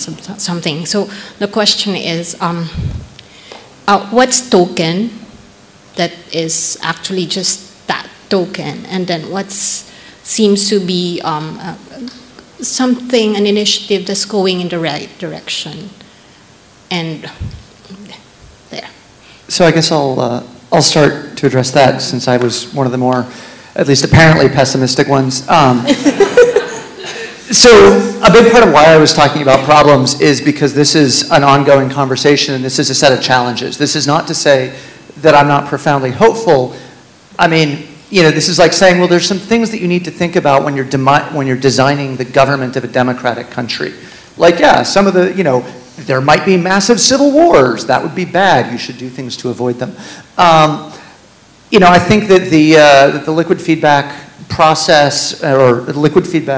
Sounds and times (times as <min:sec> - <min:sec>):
Male speech, man speaking: 0:19.5 - 0:26.0, 0:27.5 - 0:36.8, 0:37.4 - 0:51.0, 0:51.7 - 0:56.5.